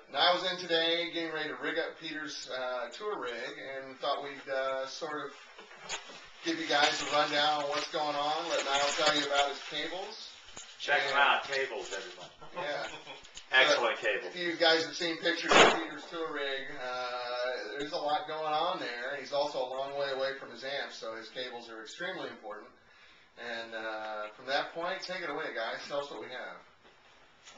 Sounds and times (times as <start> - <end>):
Speech: 0.1 - 5.4, 6.4 - 22.8, 23.4 - 26.7.